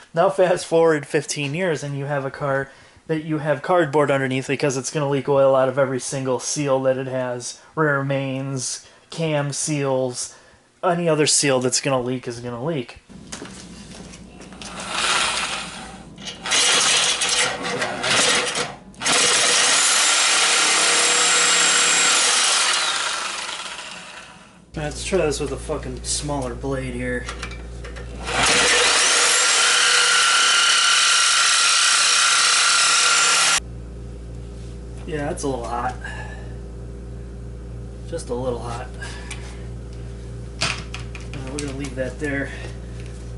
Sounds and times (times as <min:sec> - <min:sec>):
Speech: 0:00.1 - 0:13.0, 0:17.7 - 0:18.2, 0:24.8 - 0:27.4, 0:35.0 - 0:36.4, 0:38.1 - 0:39.2, 0:41.3 - 0:42.8
Drill: 0:14.7 - 0:24.6, 0:28.2 - 0:33.6.